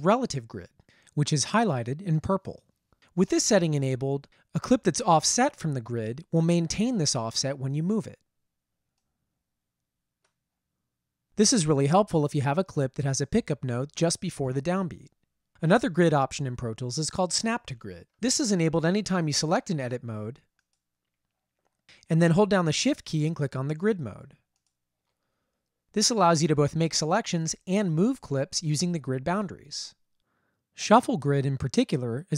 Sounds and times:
Speech: 0:00.0 - 0:02.6, 0:03.2 - 0:08.2, 0:11.4 - 0:20.4, 0:22.1 - 0:24.4, 0:26.0 - 0:30.0, 0:30.8 - 0:32.3.

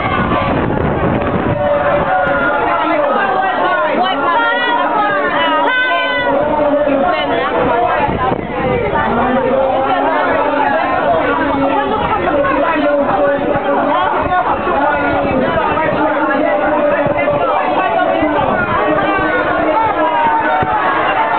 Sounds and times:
Speech: 0:01.6 - 0:21.3.

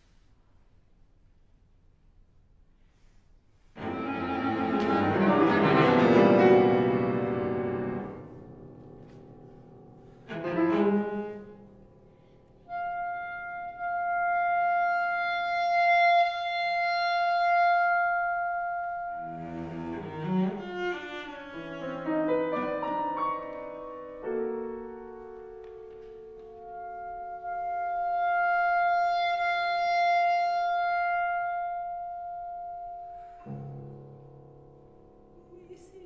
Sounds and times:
Cello: 0:03.8 - 0:36.0.

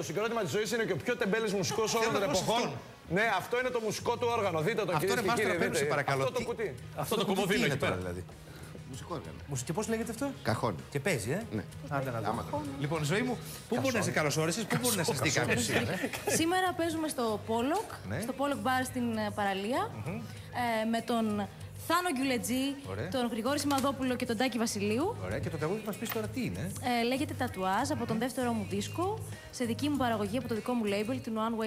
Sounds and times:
Music: 0:00.0 - 0:31.6.

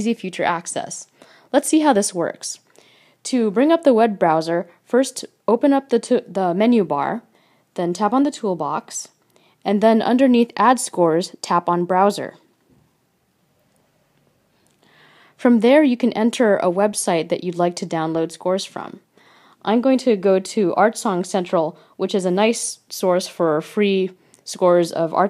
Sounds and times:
Speech: 0:00.0 - 0:02.7, 0:03.3 - 0:12.5, 0:15.4 - 0:19.0, 0:19.6 - 0:25.3.

